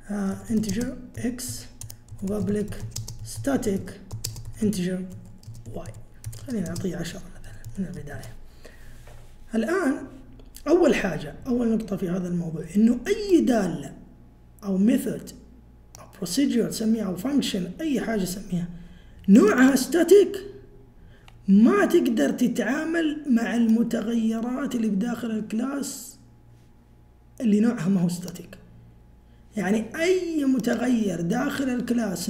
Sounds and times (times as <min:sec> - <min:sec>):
Speech: 0:00.0 - 0:08.4, 0:09.5 - 0:20.6, 0:21.5 - 0:26.2, 0:27.4 - 0:28.7, 0:29.6 - 0:32.2.